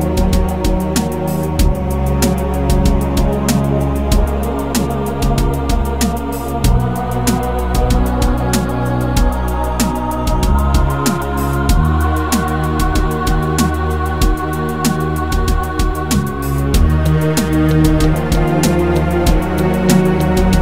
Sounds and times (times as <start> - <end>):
Music: 0.0 - 20.6.